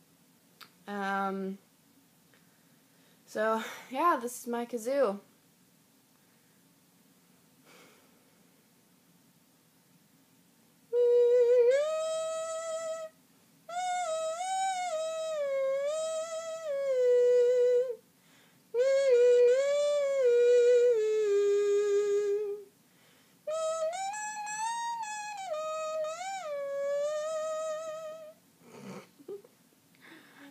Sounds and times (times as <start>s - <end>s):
Hum: 5.2s - 30.5s.